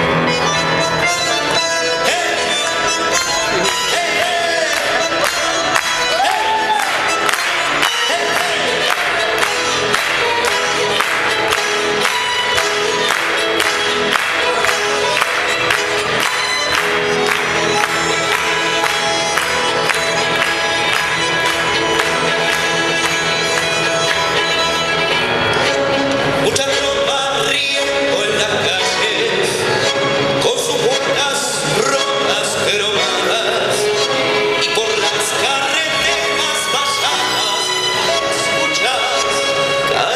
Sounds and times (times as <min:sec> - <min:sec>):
Music: 0:00.0 - 0:40.1.